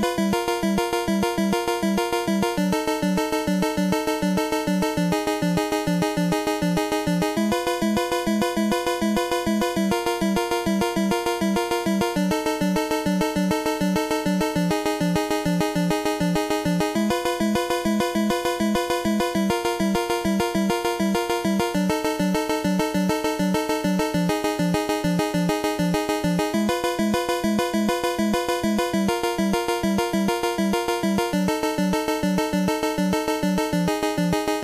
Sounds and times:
Video game music: 0.0 - 34.6.

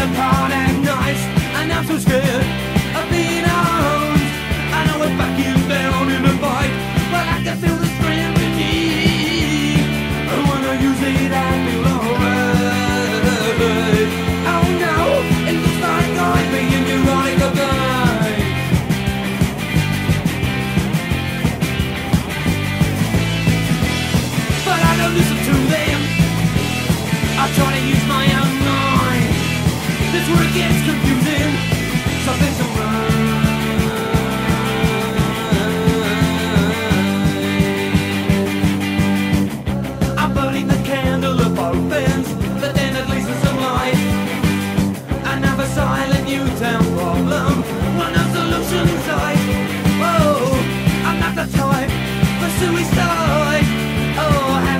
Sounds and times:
Punk rock: 0.0 - 54.7.

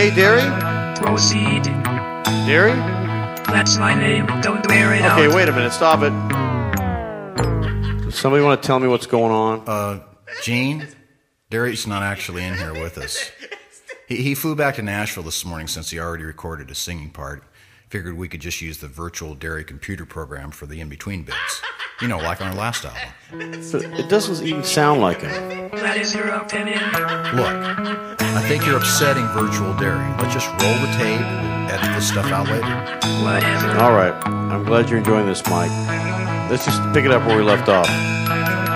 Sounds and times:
Speech: 8.2 - 13.4, 14.1 - 23.2, 28.4 - 32.7, 33.6 - 35.7, 36.5 - 37.9.

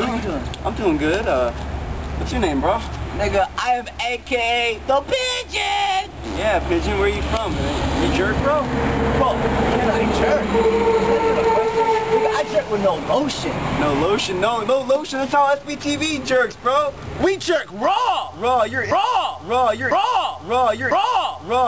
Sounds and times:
Speech: 2.2 - 21.6.

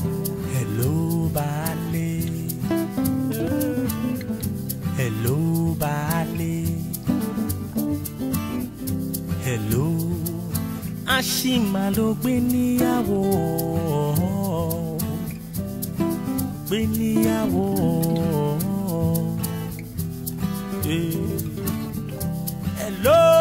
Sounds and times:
Speech: 11.1 - 15.0, 22.8 - 23.4.

